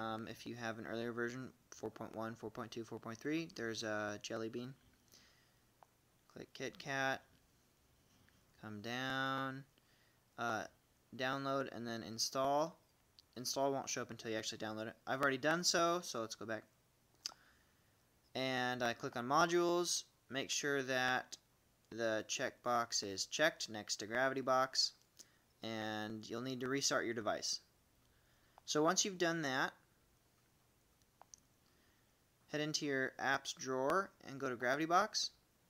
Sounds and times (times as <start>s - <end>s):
Speech: 0.0s - 4.8s, 6.3s - 7.3s, 8.6s - 9.7s, 10.4s - 12.8s, 13.4s - 16.7s, 18.4s - 25.0s, 25.6s - 27.7s, 28.7s - 29.8s, 32.5s - 35.4s
Inside, small room: 0.0s - 35.7s.